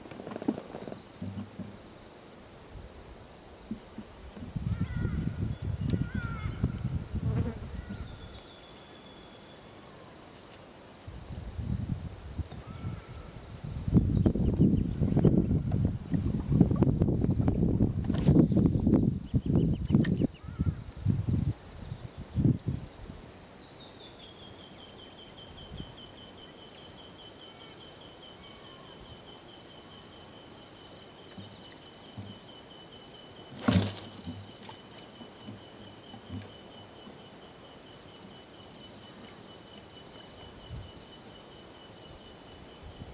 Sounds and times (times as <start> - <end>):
Wind noise (microphone): 4.2 - 8.4, 11.1 - 23.3.